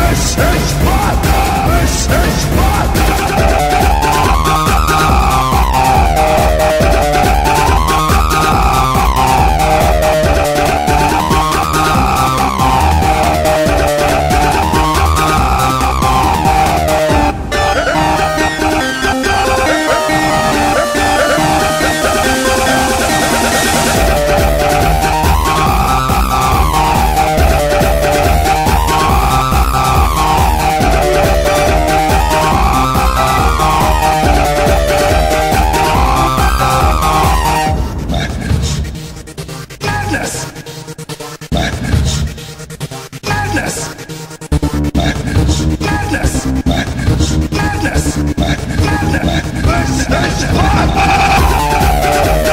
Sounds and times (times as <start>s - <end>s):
Techno: 0.0s - 52.5s.